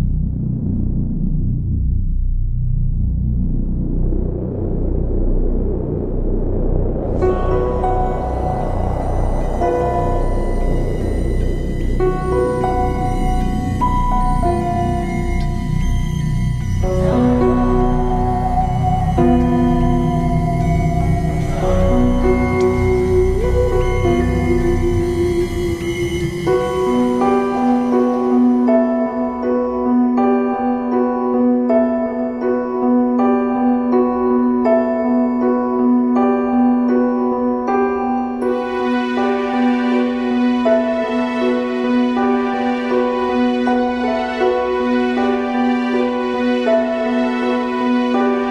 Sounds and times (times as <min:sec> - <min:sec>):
Music: 0:00.0 - 0:48.5.